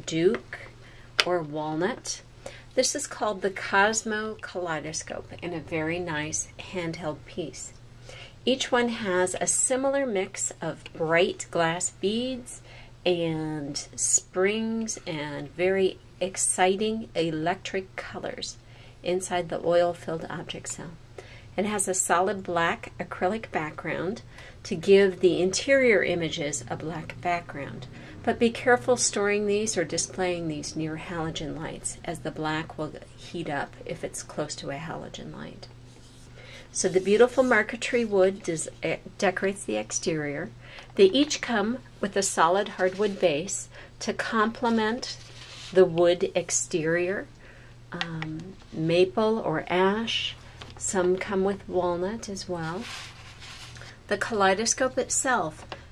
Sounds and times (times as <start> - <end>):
Speech: 0.0 - 2.2, 2.8 - 7.8, 8.4 - 21.0, 21.6 - 35.7, 36.7 - 47.3, 48.0 - 52.9, 54.1 - 55.7.